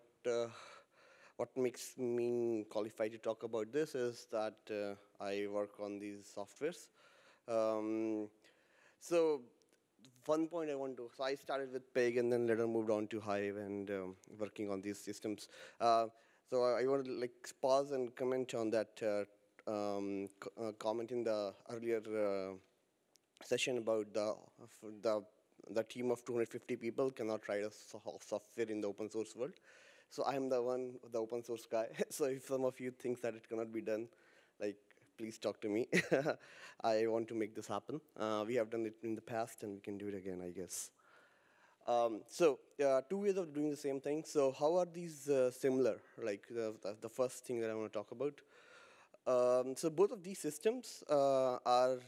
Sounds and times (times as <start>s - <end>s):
Speech: 0.0s - 8.4s, 9.0s - 22.7s, 23.4s - 41.0s, 41.8s - 48.5s, 49.2s - 52.0s.